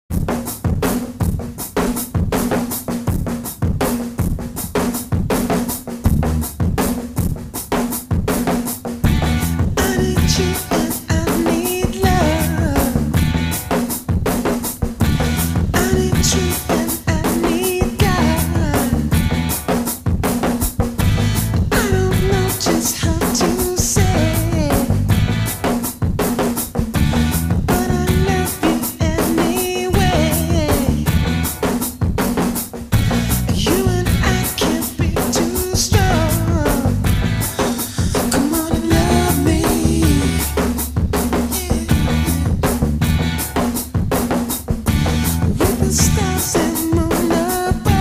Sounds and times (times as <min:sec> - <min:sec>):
Drum roll: 0:00.1 - 0:48.0.